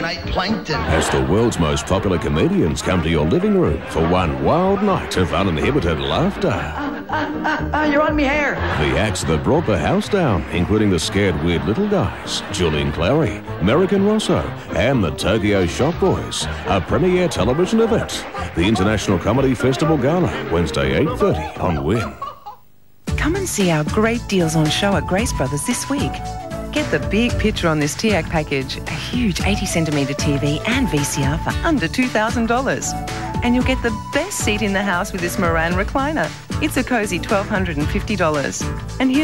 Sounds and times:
Music: 0:00.0 - 0:22.3, 0:23.0 - 0:39.2.

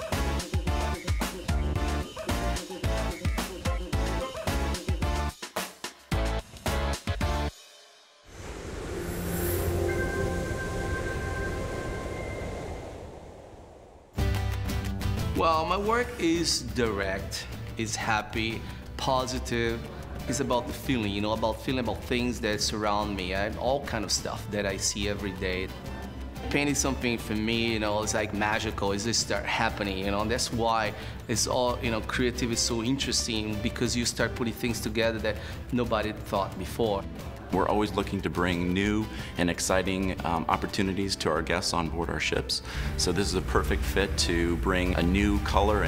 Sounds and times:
Music: 0:00.0 - 0:13.1, 0:14.2 - 0:45.8
Speech: 0:15.4 - 0:25.8, 0:26.4 - 0:45.8.

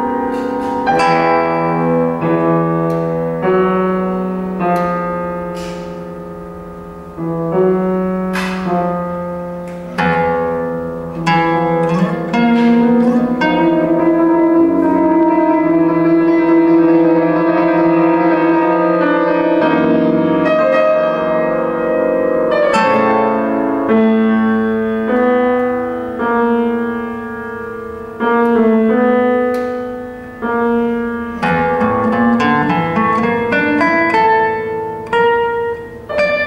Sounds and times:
Acoustic guitar: 0:00.0 - 0:36.4.

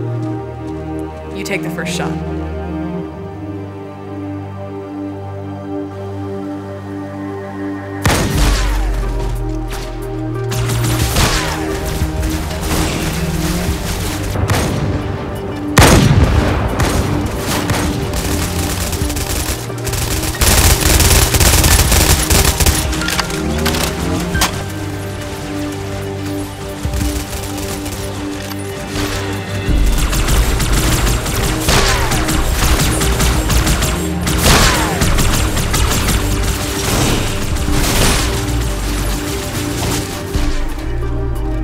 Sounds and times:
Gunshot, gunfire: 0:08.1 - 0:08.9, 0:10.6 - 0:11.8, 0:15.8 - 0:18.4, 0:30.0 - 0:38.6.

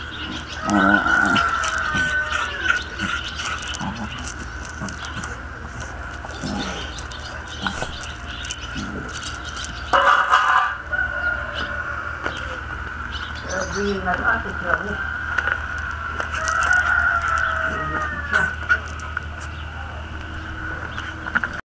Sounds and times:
Speech: 0:13.5 - 0:15.0.

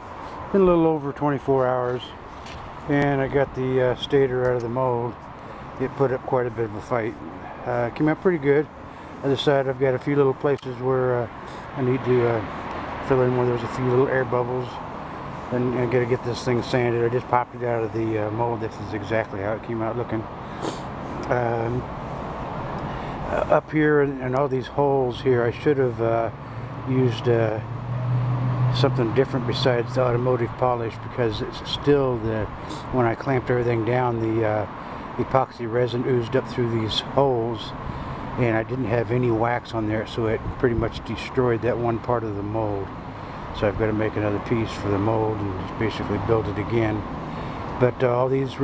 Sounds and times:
Traffic noise, roadway noise: 0:00.0 - 0:48.6
Speech: 0:00.5 - 0:02.2, 0:02.9 - 0:05.2, 0:05.8 - 0:14.8, 0:15.5 - 0:20.3, 0:21.2 - 0:21.9, 0:23.3 - 0:27.7, 0:28.8 - 0:37.8, 0:38.4 - 0:42.9, 0:43.5 - 0:47.1, 0:47.8 - 0:48.6.

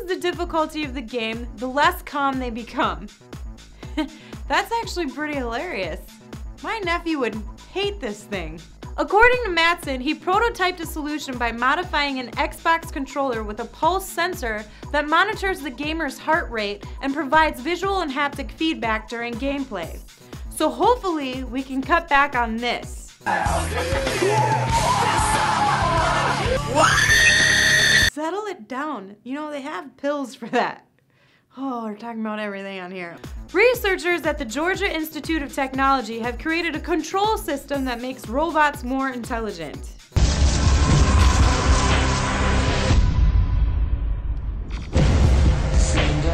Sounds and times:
Speech: 0:00.0 - 0:03.1, 0:04.5 - 0:23.2, 0:28.1 - 0:30.8, 0:31.5 - 0:40.0
Music: 0:00.0 - 0:28.2, 0:32.8 - 0:46.3.

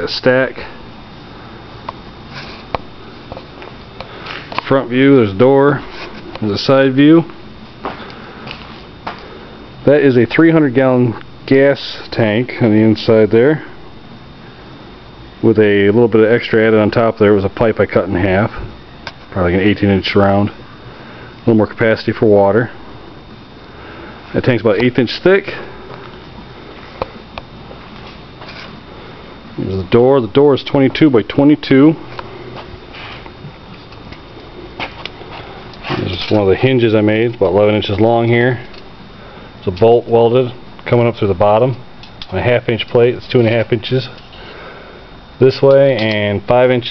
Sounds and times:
Speech: 0:00.0 - 0:00.8, 0:04.6 - 0:07.3, 0:09.8 - 0:13.8, 0:15.4 - 0:18.7, 0:19.3 - 0:20.6, 0:21.4 - 0:22.8, 0:24.3 - 0:25.7, 0:29.6 - 0:32.0, 0:35.9 - 0:38.7, 0:39.6 - 0:44.2, 0:45.4 - 0:46.9.

